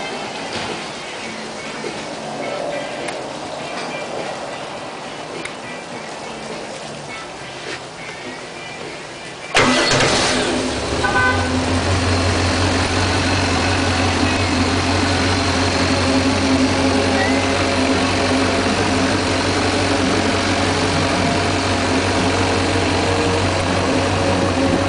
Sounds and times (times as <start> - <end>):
Vehicle: 0.0 - 24.8.